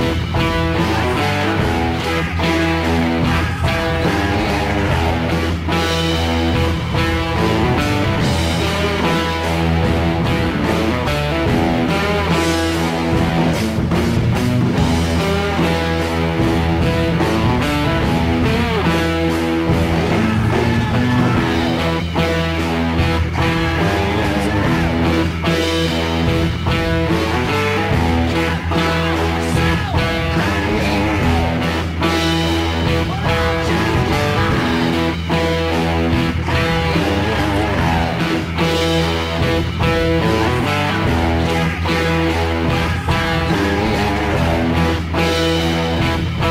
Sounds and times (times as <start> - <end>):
Electric guitar: 0.0 - 46.5.